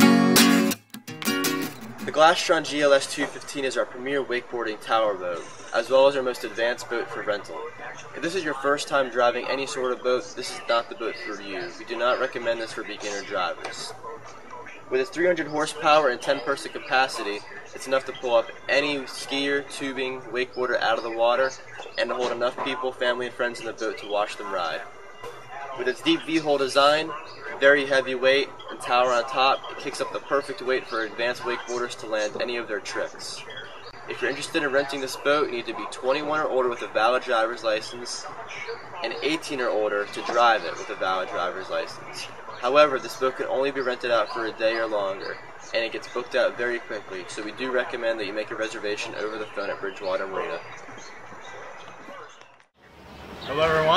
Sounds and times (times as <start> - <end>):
Speech: 2.0 - 50.8, 53.4 - 53.9.